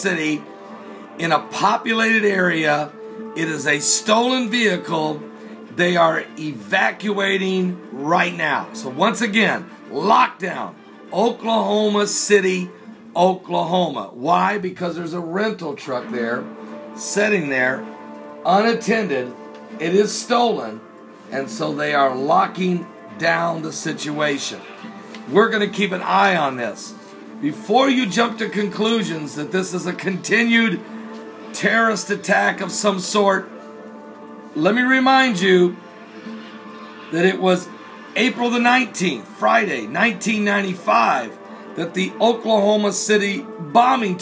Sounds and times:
Speech: 0:00.0 - 0:00.4, 0:01.2 - 0:17.8, 0:18.4 - 0:24.7, 0:25.3 - 0:30.8, 0:31.5 - 0:33.5, 0:34.6 - 0:35.8, 0:37.2 - 0:44.2
Music: 0:00.0 - 0:44.2.

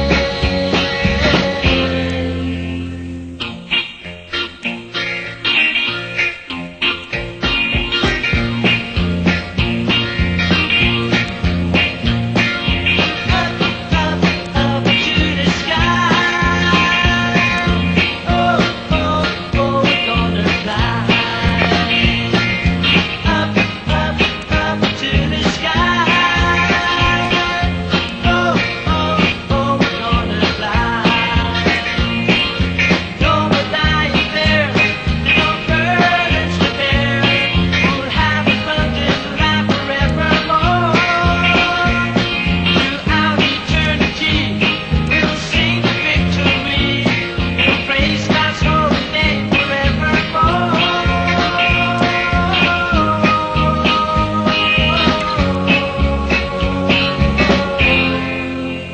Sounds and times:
Music: 0:00.0 - 0:58.9.

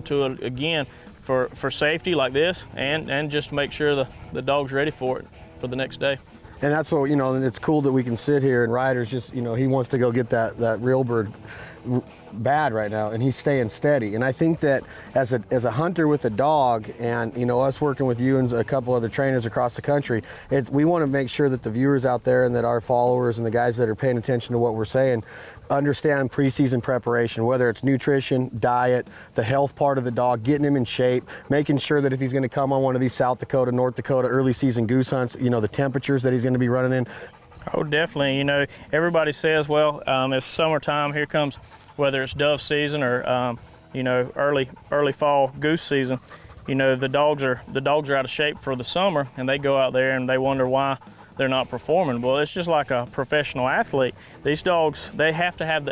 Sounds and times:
Speech: 0:00.0 - 0:55.9.

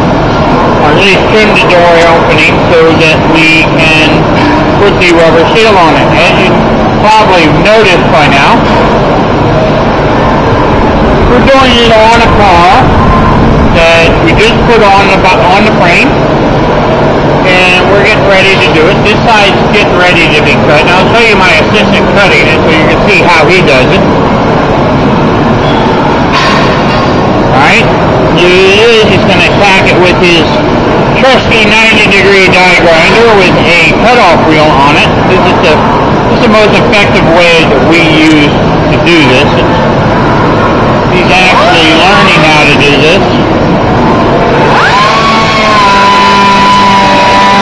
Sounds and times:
Vehicle: 0:00.0 - 0:47.6
Speech: 0:00.8 - 0:08.7, 0:11.3 - 0:12.9, 0:13.7 - 0:16.2, 0:17.4 - 0:24.1, 0:27.5 - 0:39.8, 0:41.1 - 0:43.4.

